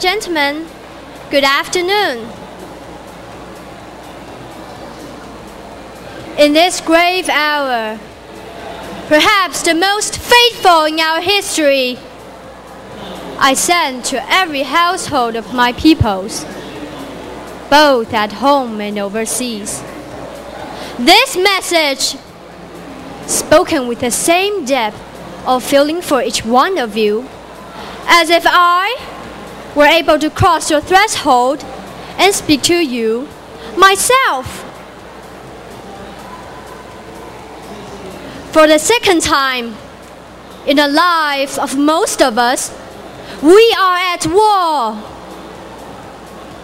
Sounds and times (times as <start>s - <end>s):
Female speech, woman speaking: 0.0s - 0.7s, 1.3s - 2.3s, 6.4s - 8.0s, 9.1s - 12.0s, 13.4s - 16.5s, 17.7s - 19.8s, 21.0s - 22.2s, 23.3s - 27.3s, 28.1s - 29.1s, 29.8s - 31.6s, 32.2s - 34.6s, 38.5s - 39.8s, 40.7s - 42.8s, 43.4s - 45.1s.